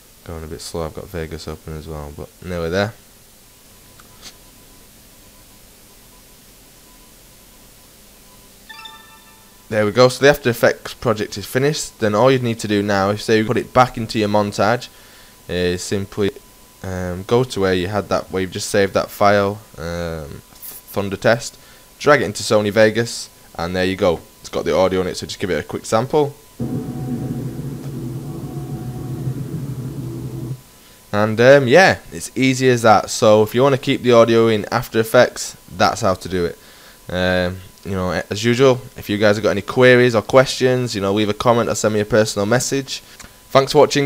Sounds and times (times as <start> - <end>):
Speech: 0.2 - 3.0, 9.7 - 14.9, 15.5 - 26.4, 31.2 - 44.0.